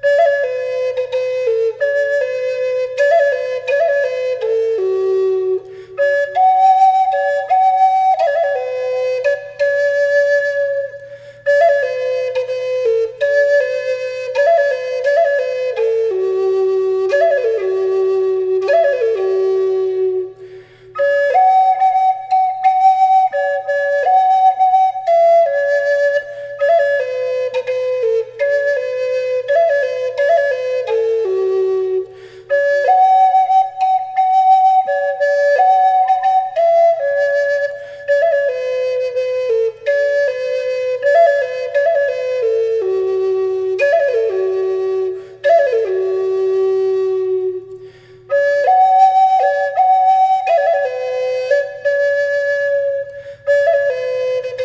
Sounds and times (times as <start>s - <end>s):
Flute: 0.0s - 54.6s.